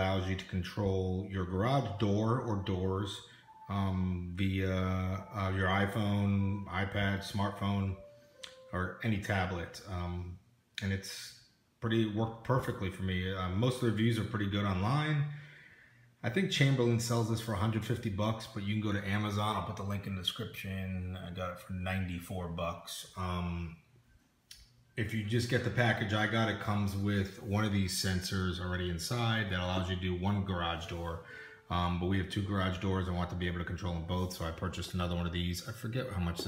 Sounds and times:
Speech: 0.0s - 15.4s, 16.2s - 23.8s, 25.0s - 36.4s.

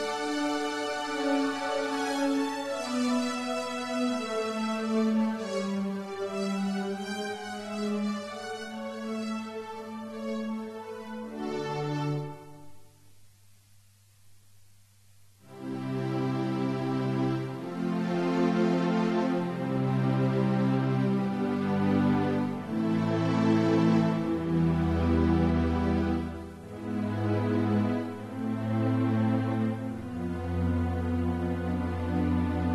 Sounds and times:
Music: 0.0s - 13.4s, 15.4s - 32.7s.

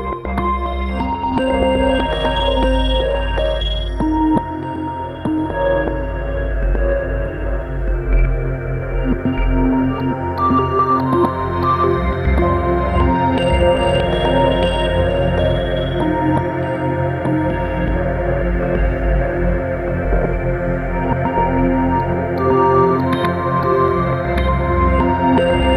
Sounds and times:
Music: 0.0s - 25.7s.

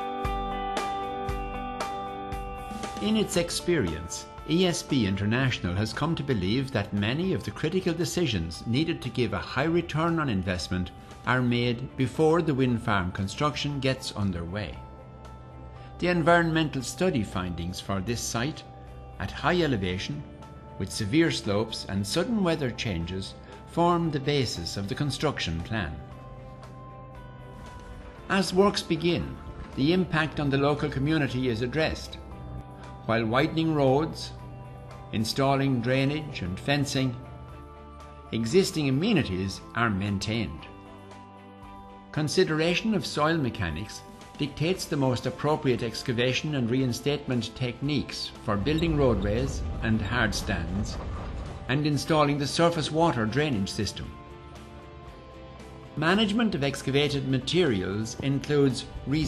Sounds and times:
Music: 0.0s - 59.2s
Speech: 3.0s - 14.8s, 16.0s - 26.0s, 28.3s - 32.2s, 33.1s - 34.4s, 35.1s - 37.2s, 38.3s - 40.7s, 42.2s - 51.0s, 51.7s - 54.2s, 56.0s - 59.2s.

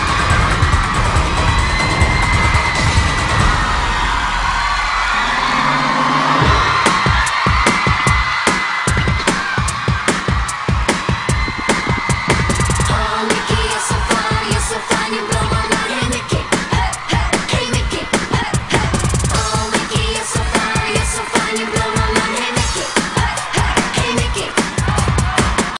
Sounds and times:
Pop music: 0.0s - 5.2s, 5.9s - 25.7s
Happy music: 0.0s - 25.7s.

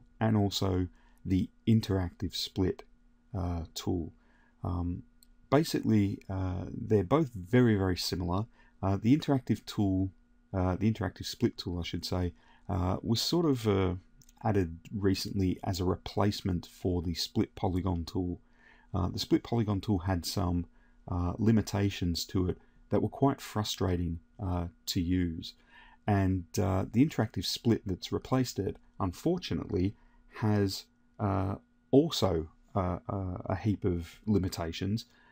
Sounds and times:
Speech: 0.2s - 2.8s, 3.4s - 18.4s, 19.0s - 35.2s.

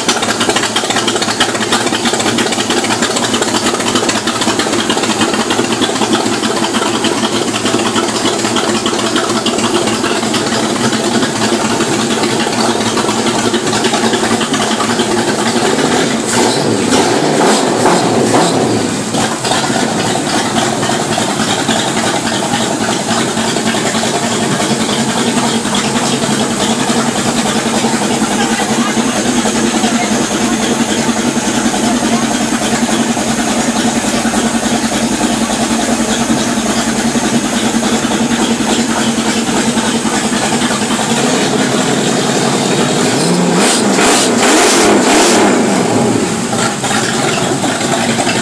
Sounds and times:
Speech: 27.8s - 32.8s.

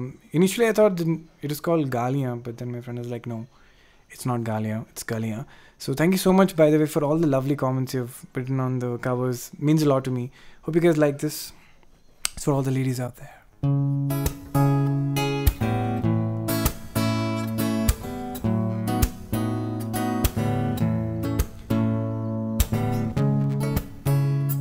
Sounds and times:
Speech: 0.0s - 3.5s, 4.1s - 11.6s, 12.4s - 13.4s
Music: 13.6s - 24.6s.

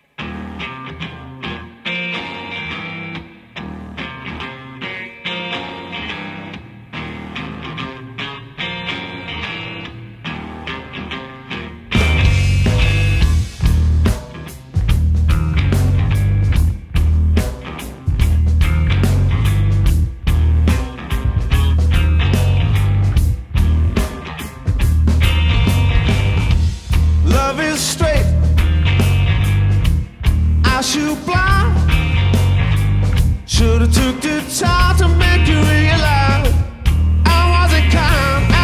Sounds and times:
Music: 0.0s - 38.6s.

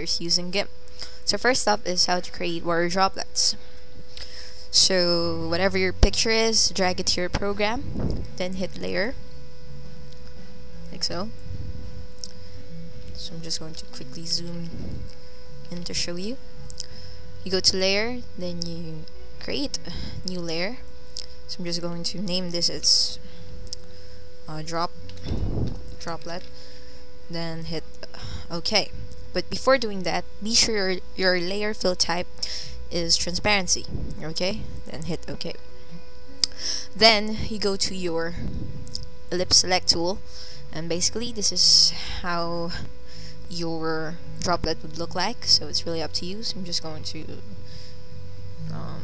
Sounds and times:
Speech: 0.0s - 0.7s, 1.3s - 3.6s, 4.8s - 9.2s, 10.8s - 11.4s, 12.8s - 14.9s, 15.7s - 16.4s, 17.5s - 20.8s, 21.5s - 23.2s, 24.5s - 24.9s, 26.0s - 26.4s, 27.3s - 32.3s, 32.9s - 35.6s, 37.0s - 38.4s, 39.3s - 42.9s, 43.5s - 47.5s, 48.6s - 49.0s.

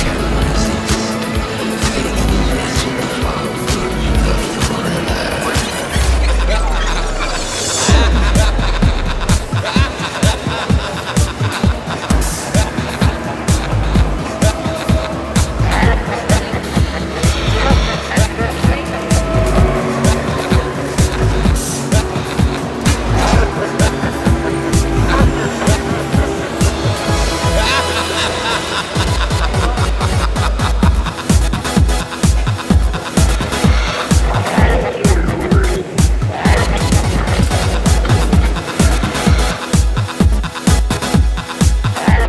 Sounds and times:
Speech: 0.0s - 7.5s, 15.6s - 20.2s, 34.2s - 37.4s, 42.0s - 42.2s
Music: 0.0s - 42.2s.

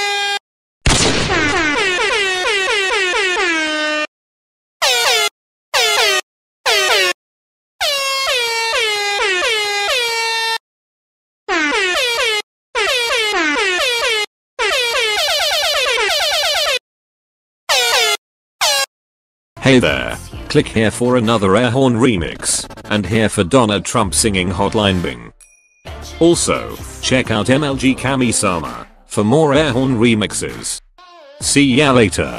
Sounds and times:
Air horn, truck horn: 0.0s - 0.4s, 1.3s - 4.1s, 4.8s - 7.2s, 7.8s - 10.6s, 11.5s - 16.8s, 17.7s - 18.9s.

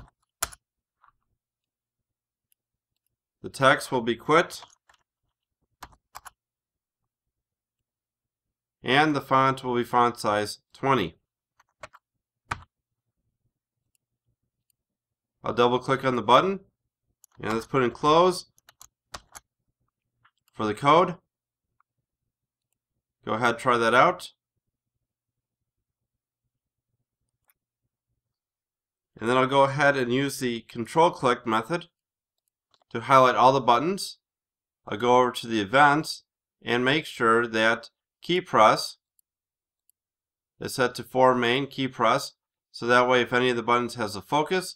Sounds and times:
Speech: 3.4s - 4.7s, 8.8s - 11.2s, 15.4s - 16.7s, 17.4s - 18.6s, 20.6s - 21.3s, 23.2s - 24.4s, 29.2s - 32.0s, 32.9s - 39.1s, 40.6s - 44.7s.

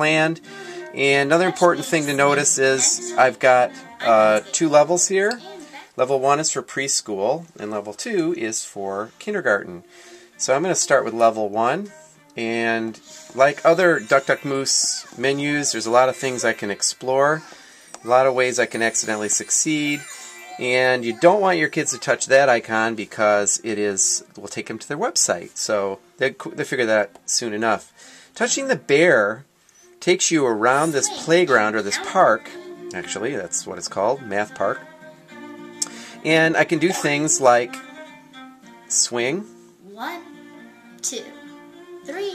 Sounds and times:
Music: 0.0s - 42.3s
Speech: 1.0s - 9.8s, 10.4s - 29.4s, 30.0s - 34.8s, 36.3s - 37.8s.

